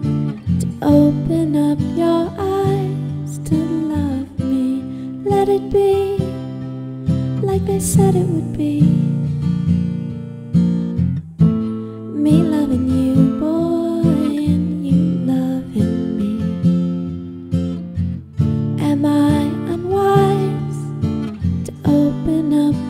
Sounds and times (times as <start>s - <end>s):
Music: 0.0s - 22.8s.